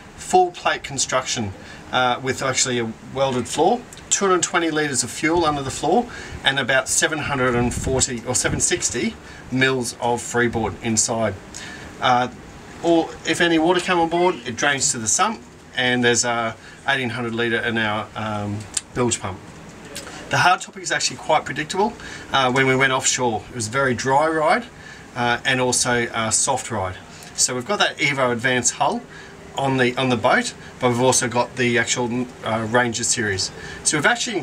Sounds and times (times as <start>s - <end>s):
Speech: 0.0s - 34.4s.